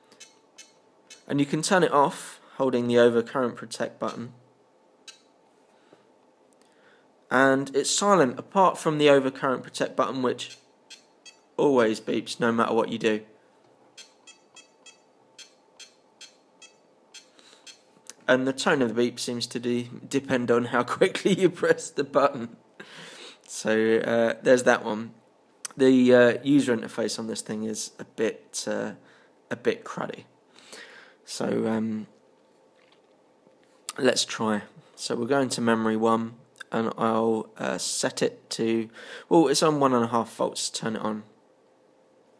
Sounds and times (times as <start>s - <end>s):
Speech: 1.3s - 4.4s, 7.3s - 10.5s, 11.6s - 13.3s, 18.2s - 22.6s, 23.5s - 30.3s, 31.3s - 32.2s, 33.9s - 41.4s.